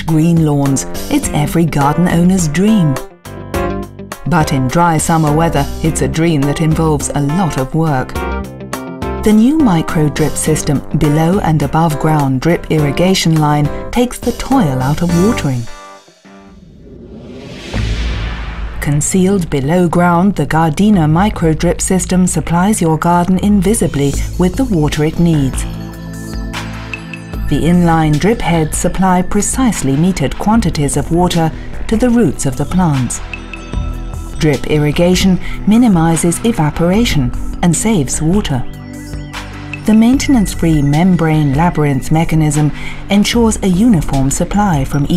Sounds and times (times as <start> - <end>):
Speech: 0.0 - 3.0, 4.3 - 8.2, 9.2 - 15.7, 18.8 - 25.7, 27.5 - 33.2, 34.4 - 38.7, 39.9 - 45.1
Music: 0.0 - 45.1.